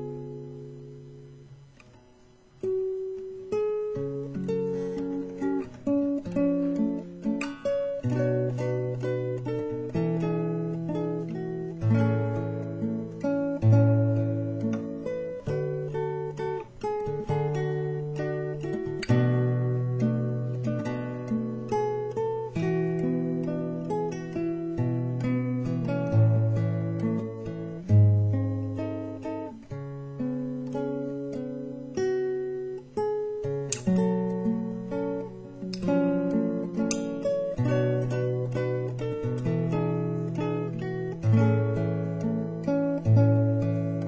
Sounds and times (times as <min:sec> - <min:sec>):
Acoustic guitar: 0:00.0 - 0:44.0
Strum: 0:00.0 - 0:44.0.